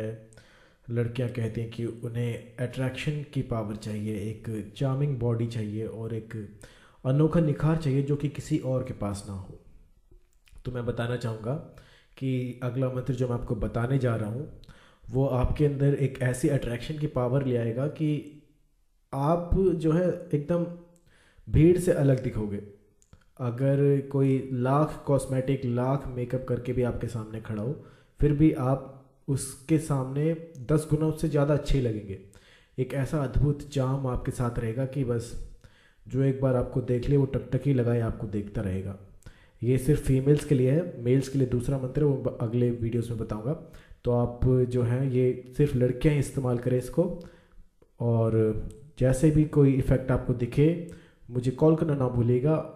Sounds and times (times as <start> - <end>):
Speech: 0.0 - 0.3, 0.9 - 9.7, 10.5 - 18.3, 19.1 - 20.8, 21.5 - 22.7, 23.4 - 47.2, 48.0 - 52.7.